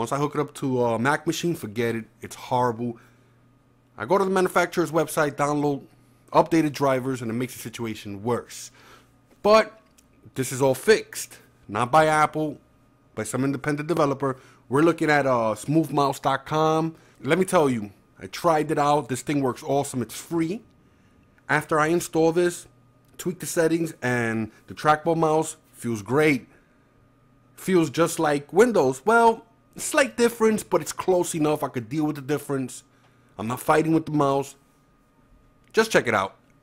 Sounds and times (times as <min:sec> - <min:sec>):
Speech: 0:00.0 - 0:03.0, 0:04.0 - 0:08.8, 0:09.4 - 0:12.6, 0:13.2 - 0:20.7, 0:21.5 - 0:26.5, 0:27.6 - 0:34.6, 0:35.7 - 0:36.4.